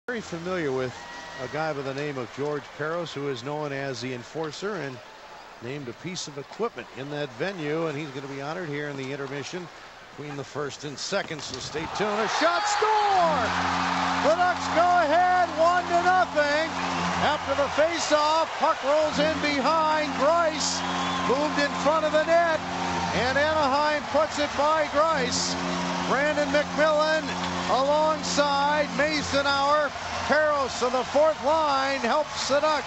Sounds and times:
Speech: 0:00.1 - 0:05.0, 0:05.6 - 0:13.5, 0:14.2 - 0:22.6, 0:23.2 - 0:32.8.

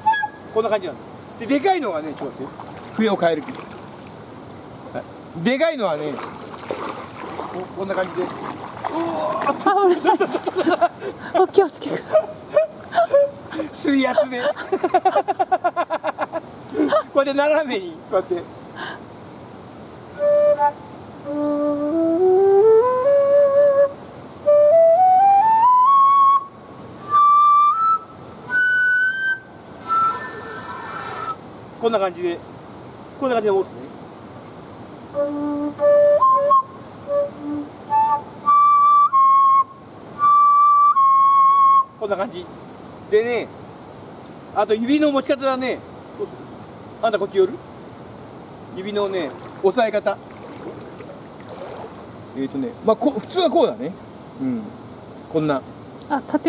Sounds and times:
Flute: 0:00.0 - 0:00.7, 0:12.1 - 0:13.6, 0:20.1 - 0:31.4, 0:35.1 - 0:42.2.

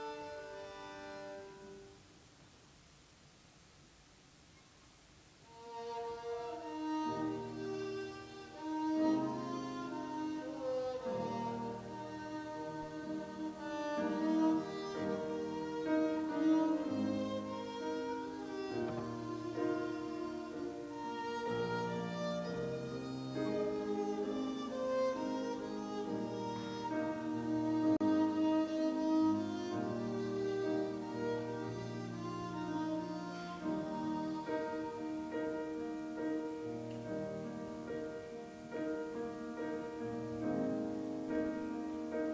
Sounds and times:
Violin, fiddle: 0:00.0 - 0:01.9, 0:05.5 - 0:42.3.

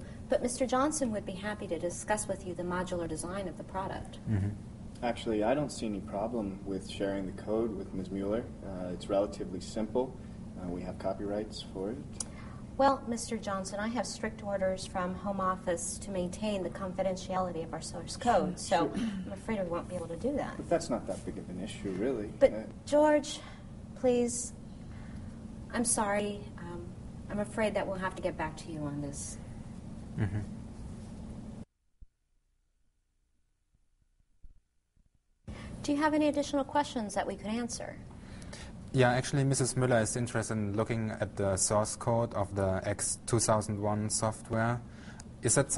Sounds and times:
Conversation: 0:00.0 - 0:30.5, 0:35.5 - 0:45.7.

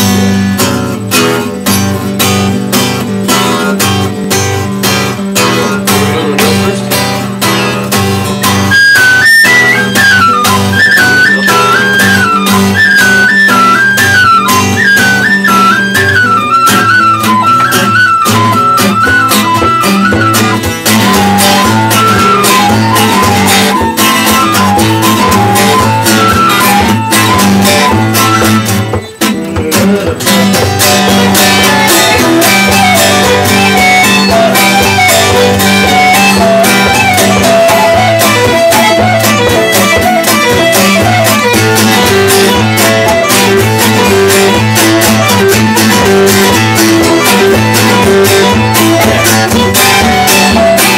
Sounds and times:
Guitar: 0:00.0 - 0:50.9
Violin, fiddle: 0:08.6 - 0:28.8, 0:30.8 - 0:50.9.

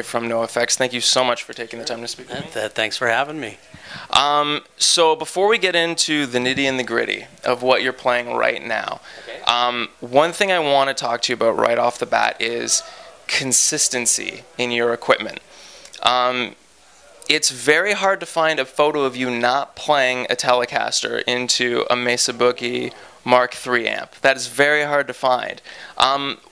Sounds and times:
Speech: 0:00.0 - 0:26.5.

